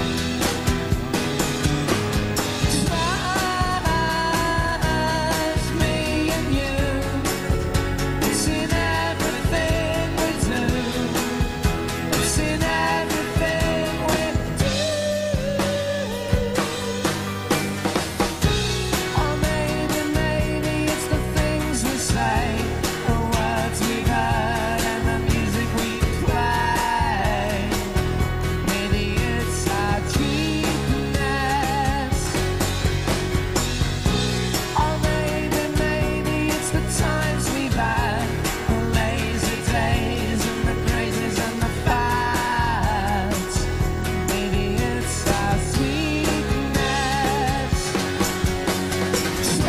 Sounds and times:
Independent music: 0.0s - 49.6s
Musical instrument: 0.0s - 49.6s.

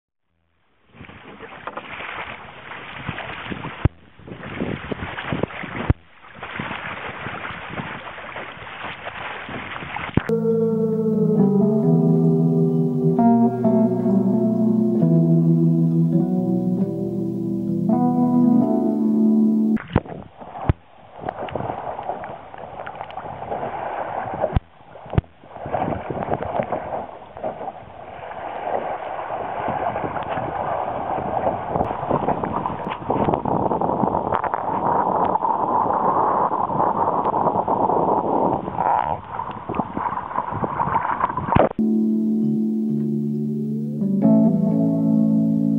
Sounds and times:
Sailboat, sailing ship: 0.8s - 10.3s, 19.8s - 41.8s.

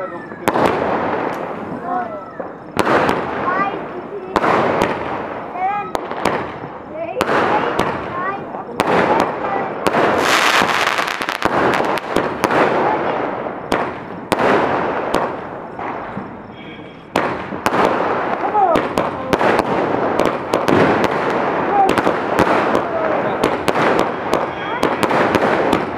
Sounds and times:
Firecracker: 0.0s - 25.9s.

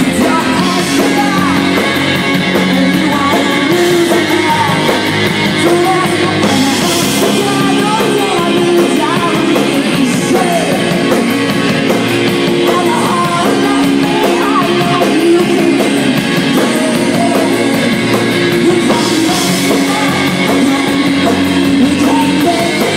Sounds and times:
Music: 0.0s - 22.9s.

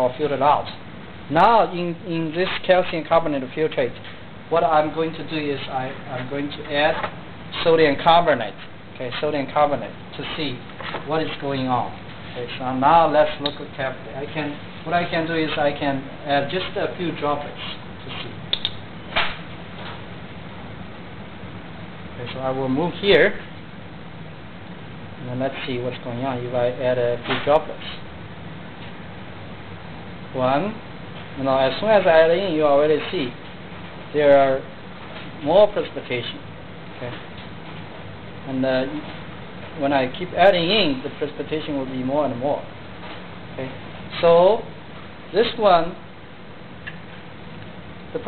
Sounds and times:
Speech: 0.0s - 18.4s, 22.2s - 23.5s, 25.2s - 28.0s, 30.3s - 30.8s, 31.4s - 33.4s, 34.1s - 34.7s, 35.4s - 36.4s, 37.0s - 37.2s, 38.5s - 39.1s, 39.8s - 42.7s, 43.6s - 46.0s.

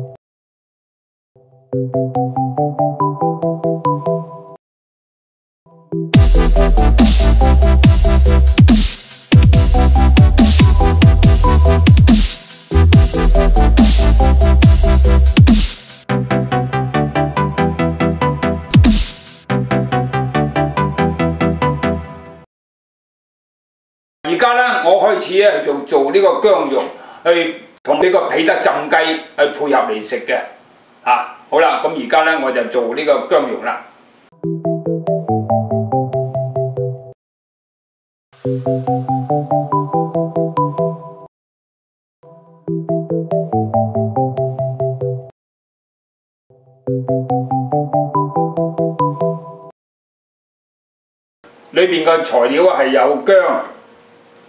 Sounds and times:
Music: 1.4s - 4.6s, 5.7s - 22.5s, 34.4s - 37.2s, 38.4s - 41.3s, 42.2s - 45.4s, 46.5s - 49.8s
Speech: 24.3s - 33.9s, 51.7s - 53.8s.

